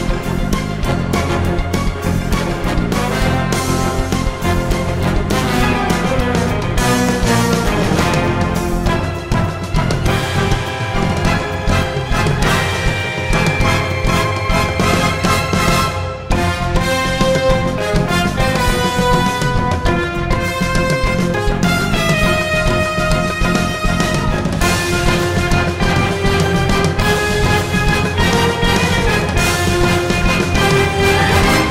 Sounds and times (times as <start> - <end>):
Music: 0.0 - 31.7.